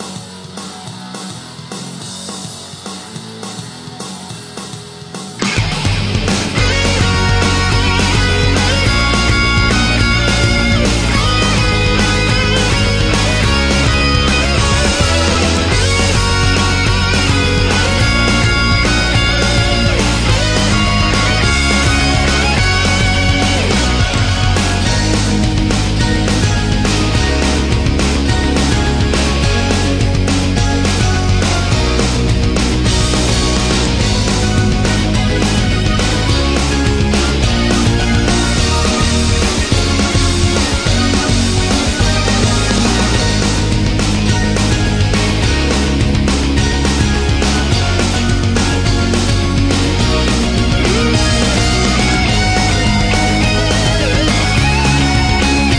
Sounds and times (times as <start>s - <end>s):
Music: 0.0s - 55.7s.